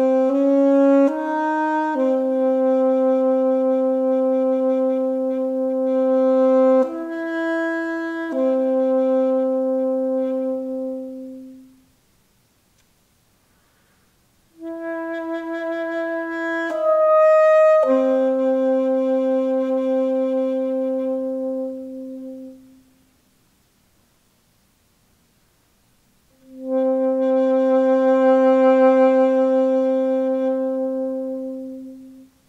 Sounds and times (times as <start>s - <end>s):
Brass instrument: 0.0s - 11.9s, 14.5s - 23.1s, 26.3s - 32.4s
Saxophone: 0.0s - 11.9s, 14.5s - 23.0s, 26.3s - 32.4s.